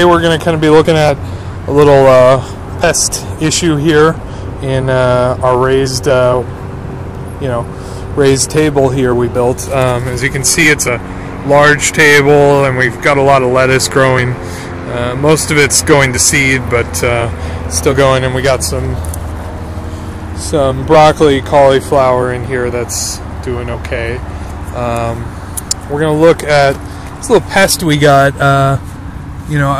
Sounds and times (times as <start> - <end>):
Speech: 0.0 - 6.5, 7.4 - 19.1, 20.4 - 28.8, 29.5 - 29.7.